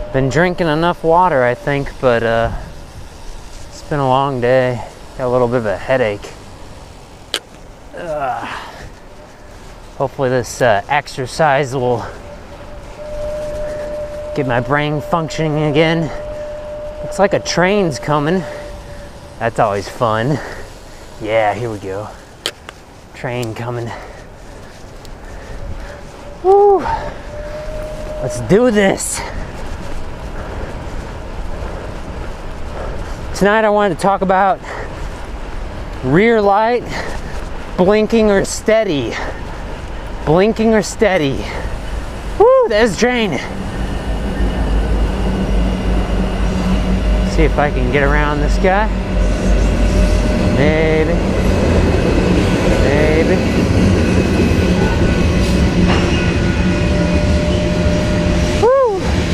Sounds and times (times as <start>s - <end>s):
Bicycle: 0.0s - 59.3s
Speech: 0.2s - 2.6s, 3.8s - 6.3s, 10.0s - 12.2s, 14.4s - 16.2s, 17.1s - 18.5s, 19.4s - 20.4s, 21.2s - 22.2s, 23.2s - 24.0s, 28.2s - 29.4s, 33.4s - 34.6s, 36.0s - 36.9s, 37.8s - 39.3s, 40.3s - 41.6s, 42.4s - 43.5s, 47.3s - 48.9s, 50.6s - 51.2s, 52.8s - 53.5s.